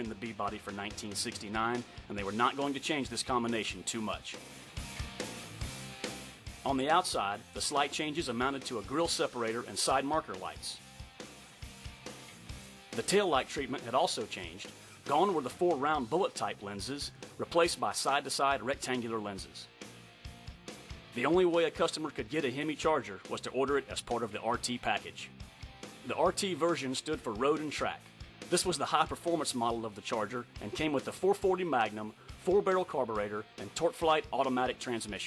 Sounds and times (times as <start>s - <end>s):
Speech: 0.0s - 4.4s, 6.6s - 10.8s, 13.0s - 19.7s, 21.2s - 25.3s, 26.0s - 35.2s
Music: 0.0s - 35.2s.